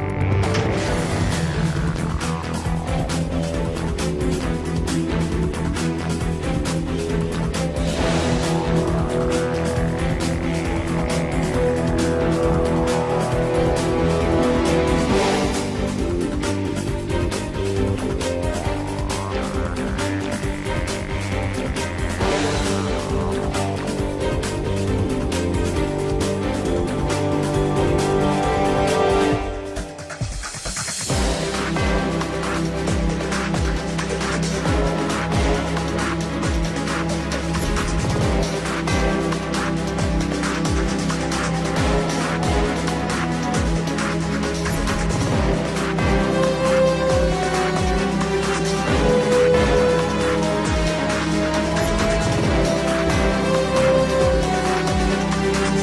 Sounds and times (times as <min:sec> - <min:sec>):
Background music: 0:00.0 - 0:55.8
Soundtrack music: 0:00.0 - 0:55.8
Video game music: 0:00.0 - 0:55.8.